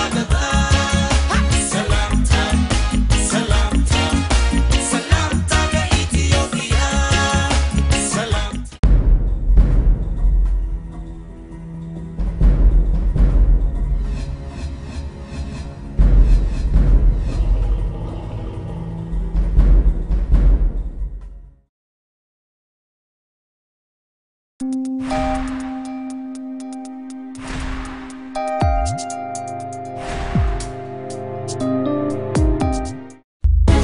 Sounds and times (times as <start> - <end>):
Exciting music: 0.0 - 18.1, 24.6 - 33.8.